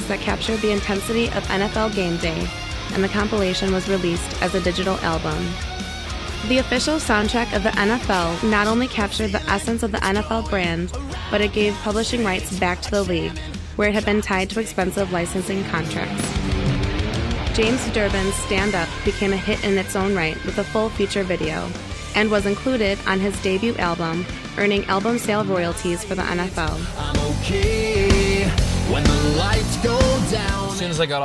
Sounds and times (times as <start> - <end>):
Speech: 0.0 - 5.6, 6.4 - 16.3, 17.6 - 26.9, 30.6 - 31.2
Music: 0.0 - 31.2.